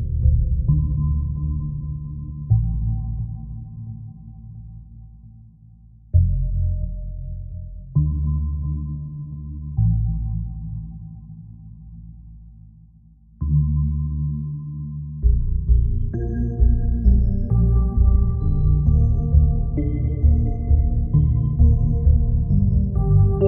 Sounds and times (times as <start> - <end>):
Background music: 0.0 - 23.4.